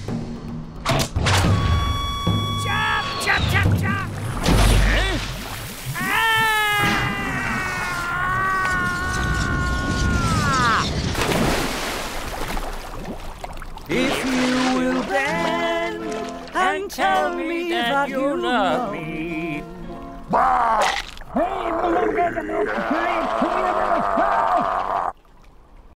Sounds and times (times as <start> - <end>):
Music: 0.0 - 4.2, 13.9 - 20.4
Male singing: 13.9 - 19.8.